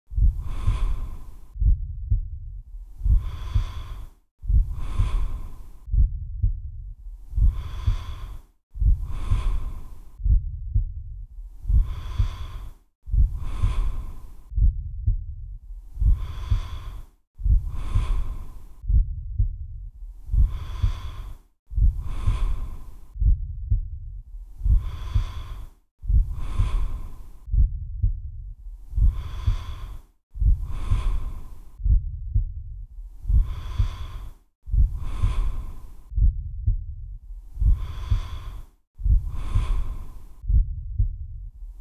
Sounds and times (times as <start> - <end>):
Gasp: 20.3 - 23.2, 24.6 - 27.5, 29.0 - 31.8, 33.3 - 36.1, 37.6 - 40.4.